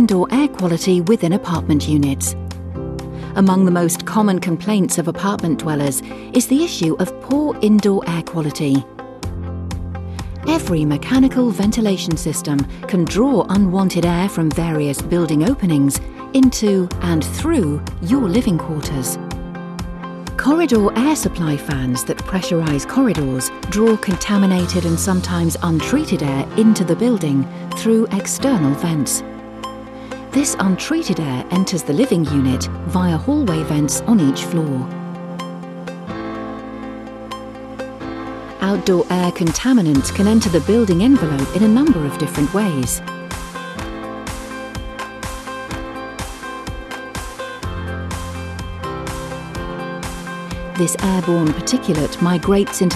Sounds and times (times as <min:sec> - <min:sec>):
Speech: 0:00.0 - 0:02.4, 0:03.4 - 0:08.8, 0:10.5 - 0:19.2, 0:20.4 - 0:29.2, 0:30.4 - 0:34.9, 0:38.6 - 0:43.0, 0:50.8 - 0:52.9
Music: 0:00.0 - 0:52.9.